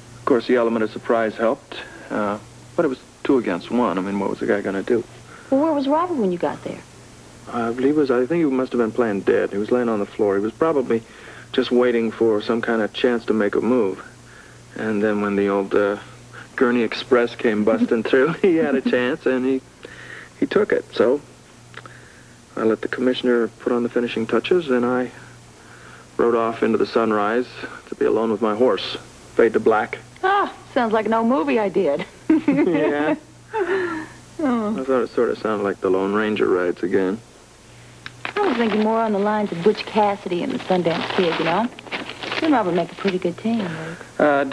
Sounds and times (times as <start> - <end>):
Speech: 7.5 - 11.0, 11.6 - 14.1, 14.8 - 19.6.